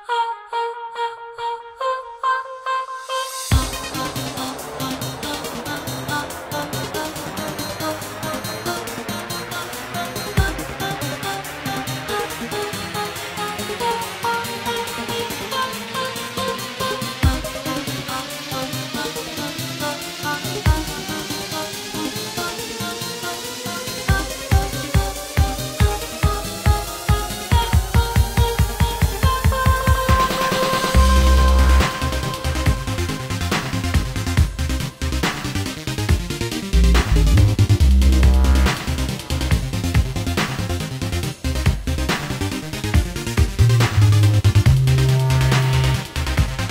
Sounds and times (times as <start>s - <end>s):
Music: 0.0s - 46.7s.